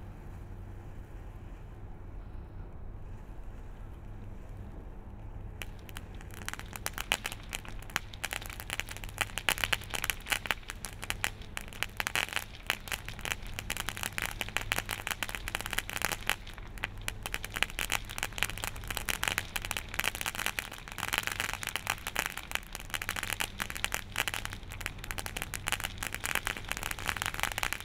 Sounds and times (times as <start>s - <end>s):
Fireworks: 3.5s - 27.8s.